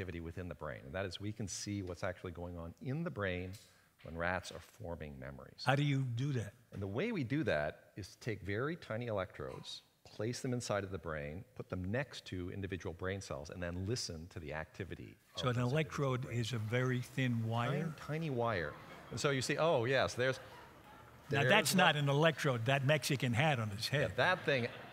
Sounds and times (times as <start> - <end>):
Speech: 0.0 - 24.8.